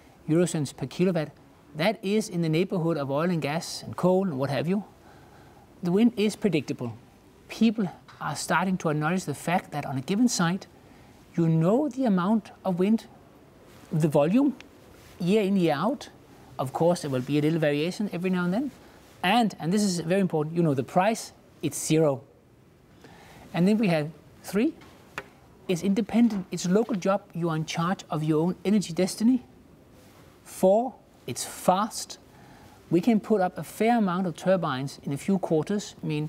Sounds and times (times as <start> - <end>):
Speech: 0.3 - 4.9, 5.8 - 10.7, 11.3 - 13.2, 13.9 - 14.6, 15.2 - 22.3, 23.5 - 24.8, 25.7 - 29.5, 30.5 - 32.2, 32.9 - 36.2.